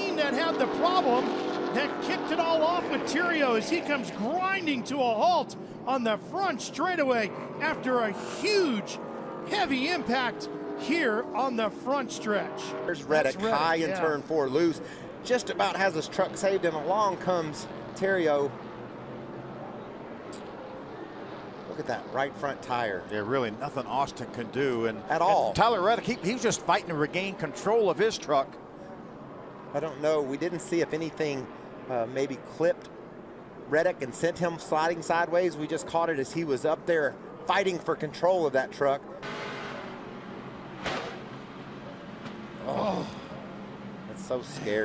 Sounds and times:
Speech: 0.0s - 18.5s, 21.7s - 28.5s, 29.8s - 32.9s, 33.7s - 39.0s, 44.1s - 44.8s
Vehicle: 0.0s - 44.8s.

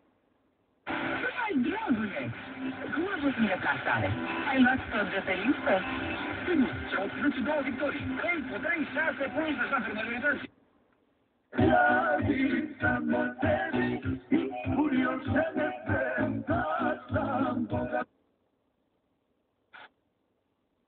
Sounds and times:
Music: 0.9s - 1.3s, 2.0s - 9.7s, 11.6s - 18.1s
Radio: 0.9s - 10.5s, 19.8s - 20.0s
Speech: 1.2s - 10.5s.

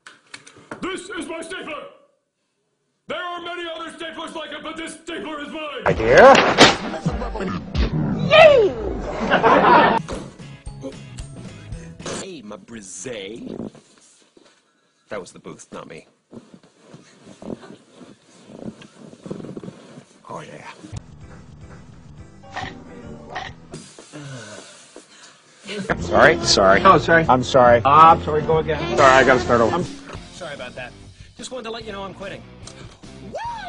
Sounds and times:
Speech: 3.1s - 6.4s, 12.2s - 13.6s, 25.8s - 32.4s
Music: 10.0s - 12.2s, 21.0s - 23.8s, 25.9s - 33.6s.

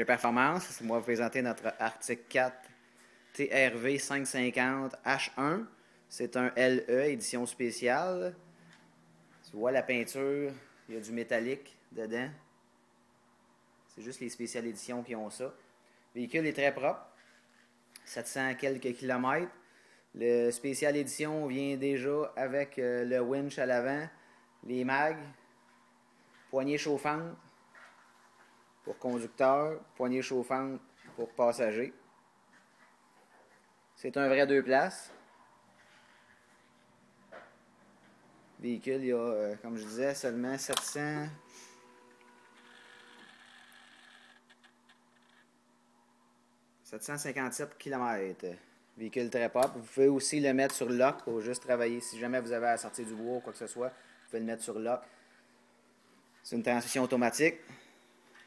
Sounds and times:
Speech: 0.0s - 2.7s, 3.4s - 8.4s, 9.4s - 12.4s, 13.9s - 15.6s, 16.2s - 17.2s, 18.0s - 19.6s, 20.2s - 25.4s, 26.5s - 27.4s, 28.9s - 32.0s, 34.0s - 35.2s, 38.6s - 41.4s, 46.8s - 55.1s, 56.4s - 57.8s.

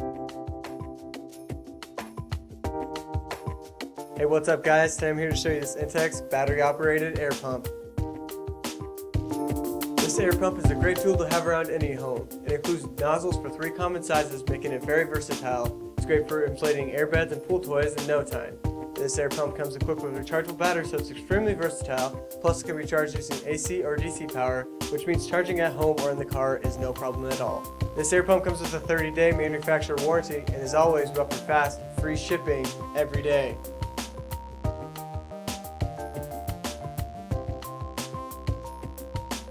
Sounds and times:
Music: 0.0s - 39.5s
Speech: 4.2s - 7.7s, 10.0s - 33.6s.

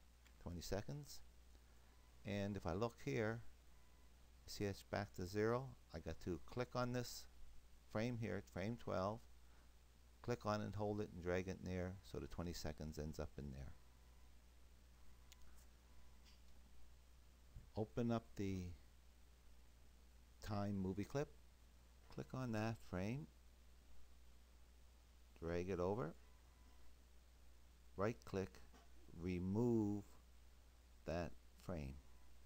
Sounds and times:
Inside, small room: 0.0s - 32.4s
Speech: 0.4s - 1.3s, 2.2s - 3.5s, 4.5s - 7.3s, 7.9s - 9.3s, 10.2s - 13.8s, 17.7s - 18.9s, 20.4s - 21.4s, 22.1s - 23.4s, 25.4s - 26.2s, 28.0s - 30.2s, 31.0s - 32.1s.

